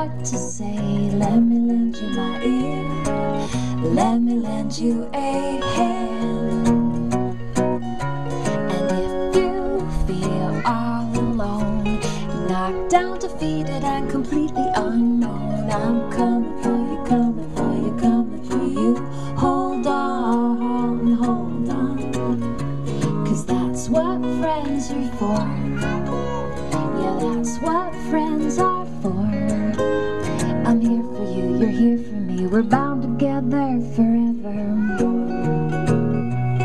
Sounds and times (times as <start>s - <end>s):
Music: 0.0s - 36.6s.